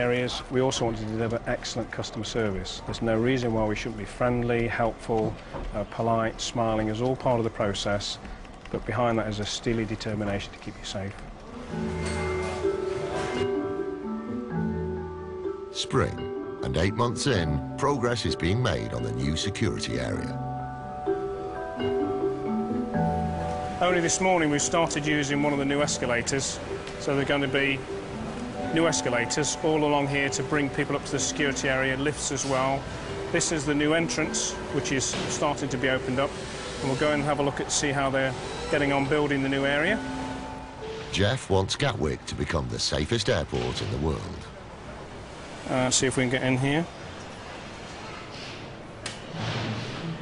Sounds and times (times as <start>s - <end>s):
Music: 11.4s - 42.6s.